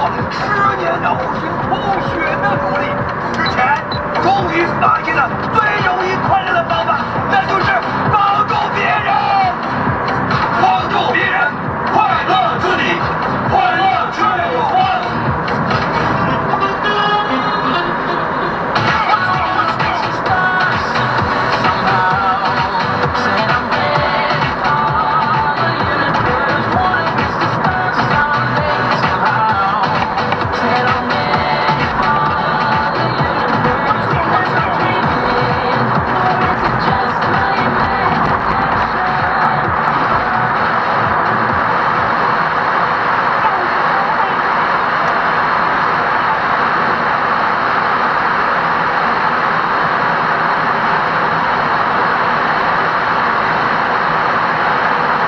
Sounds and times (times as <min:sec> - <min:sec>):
Music: 0:00.0 - 0:45.6.